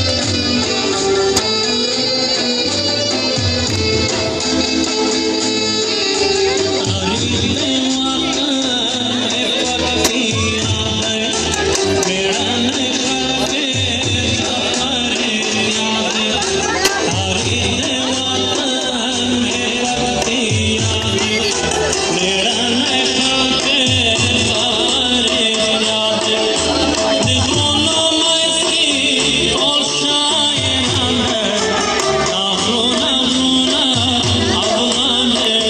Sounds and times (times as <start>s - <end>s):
Music: 0.0s - 35.7s
Speech: 5.0s - 35.7s.